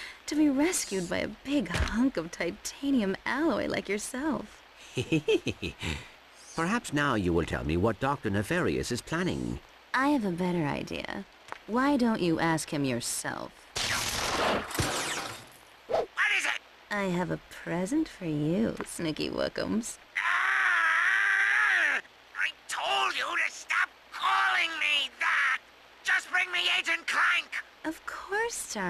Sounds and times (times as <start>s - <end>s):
Speech: 0.3s - 4.5s, 6.6s - 13.5s, 16.2s - 20.0s, 22.4s - 28.8s.